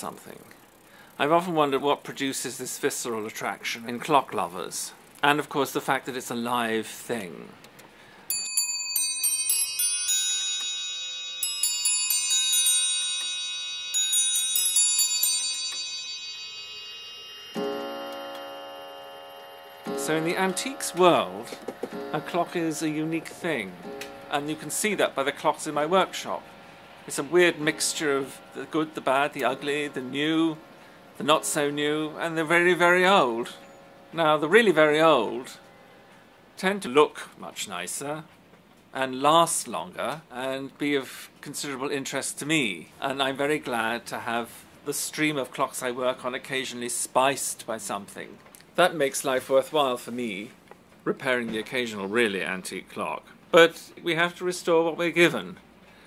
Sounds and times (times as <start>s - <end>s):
Speech: 0.0s - 0.5s, 1.2s - 7.6s, 20.0s - 21.6s, 22.2s - 26.4s, 27.1s - 30.6s, 31.2s - 33.6s, 34.2s - 35.6s, 36.6s - 38.3s, 39.0s - 55.6s
Music: 9.0s - 26.4s.